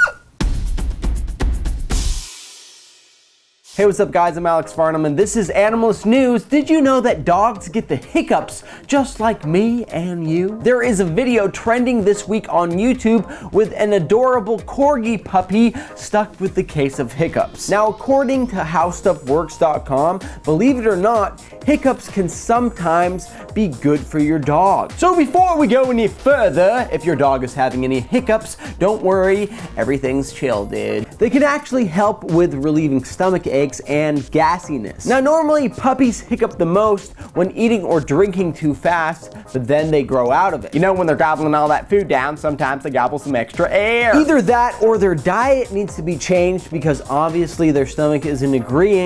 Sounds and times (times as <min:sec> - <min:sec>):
Music: 0:00.0 - 0:49.0
Speech: 0:03.8 - 0:49.0.